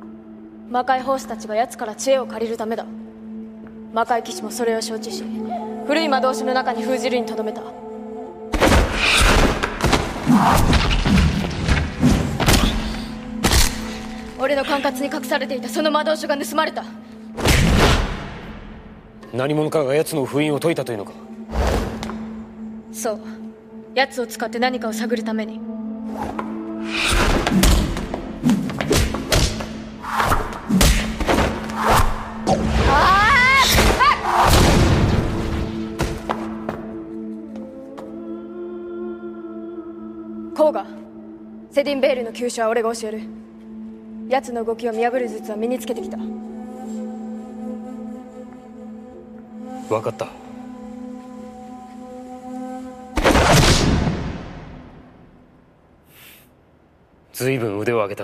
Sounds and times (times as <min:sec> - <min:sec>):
Music: 0:00.0 - 0:56.4.